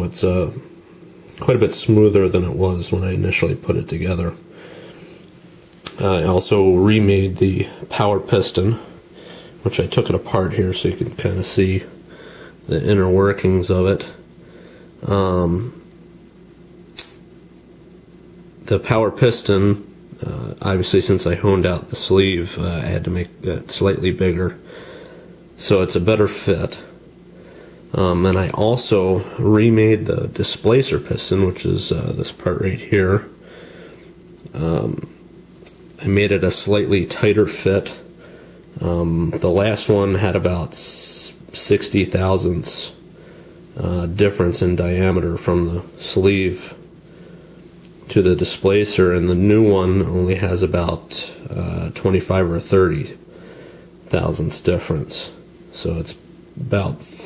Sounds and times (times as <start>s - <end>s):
Speech: 0.0s - 0.7s, 1.3s - 4.5s, 5.9s - 9.0s, 9.6s - 12.0s, 12.7s - 14.2s, 15.0s - 15.8s, 18.6s - 24.6s, 25.6s - 27.0s, 27.9s - 33.4s, 34.5s - 35.2s, 36.0s - 38.1s, 38.8s - 43.0s, 43.8s - 46.8s, 48.0s - 53.2s, 54.1s - 57.2s.